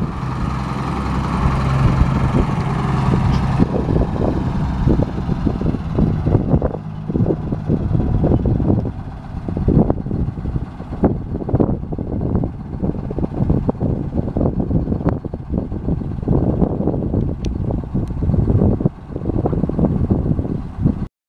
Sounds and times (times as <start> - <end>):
Bus: 0.0 - 21.1.